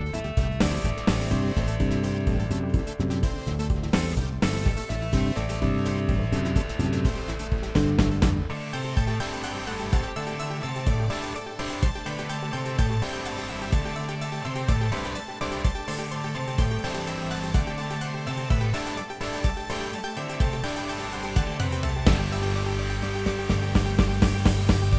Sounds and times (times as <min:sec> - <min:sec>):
Music: 0:00.0 - 0:24.9.